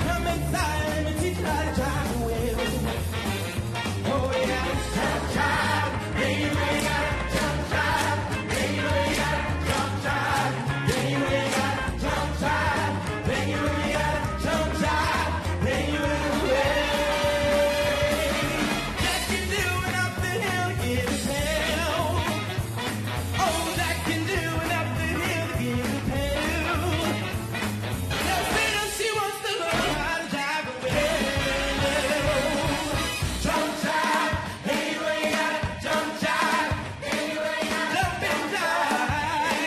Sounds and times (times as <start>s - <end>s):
Choir: 4.3s - 18.8s, 30.7s - 39.6s.